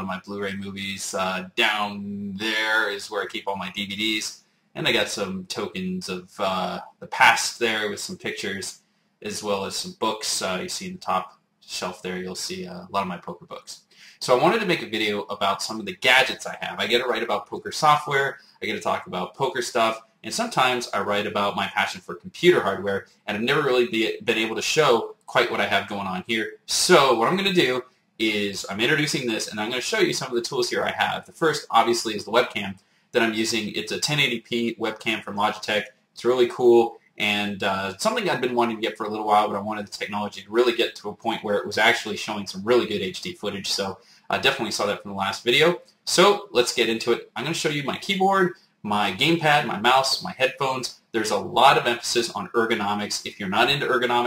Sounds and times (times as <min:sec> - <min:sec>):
Speech: 0:00.0 - 0:54.2.